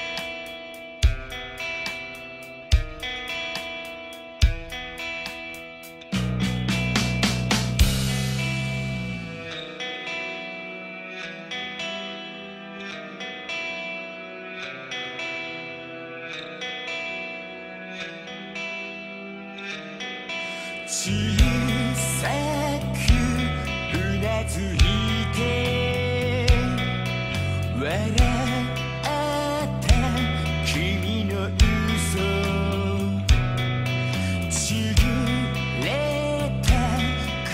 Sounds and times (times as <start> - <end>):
Music: 0.0 - 37.5.